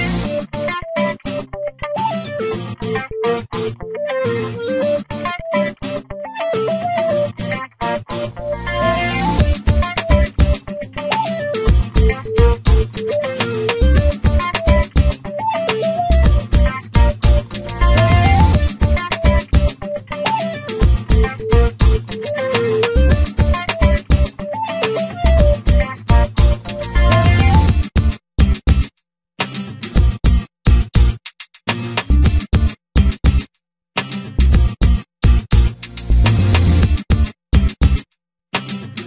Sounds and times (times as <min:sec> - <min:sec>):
Music: 0:00.0 - 0:38.0, 0:38.6 - 0:39.0.